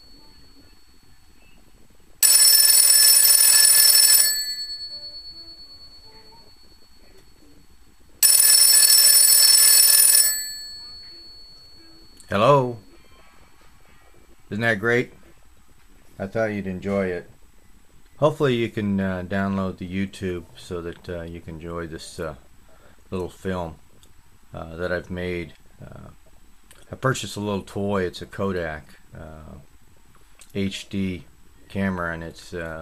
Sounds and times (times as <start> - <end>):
Telephone: 0.0 - 13.4
Music: 4.7 - 8.2, 10.7 - 14.6.